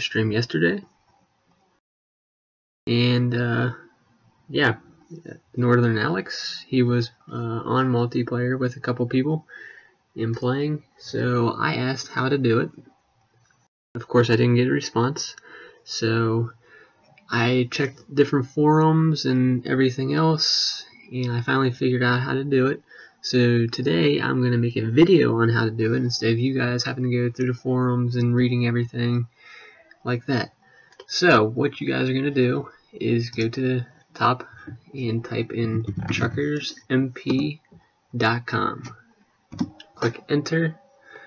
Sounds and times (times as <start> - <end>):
Speech: 0.0 - 0.8, 2.9 - 3.8, 4.5 - 9.6, 10.2 - 12.8, 14.0 - 16.6, 17.3 - 29.3, 30.0 - 39.0, 39.6 - 40.8.